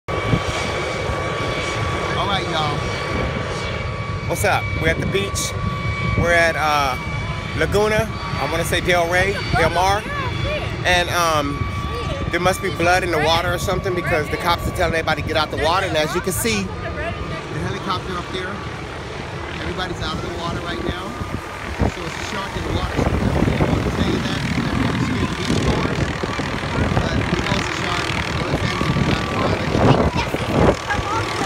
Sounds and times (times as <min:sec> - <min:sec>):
Aircraft engine: 0:00.1 - 0:31.4.